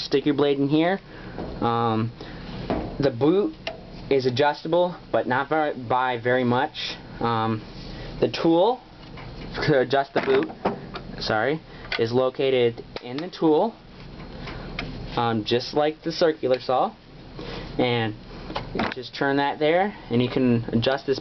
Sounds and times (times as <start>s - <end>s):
Speech: 0.0s - 1.0s, 1.6s - 2.2s, 3.0s - 7.6s, 8.2s - 8.8s, 9.6s - 10.5s, 11.2s - 13.8s, 15.2s - 17.0s, 17.8s - 18.2s, 18.8s - 21.2s.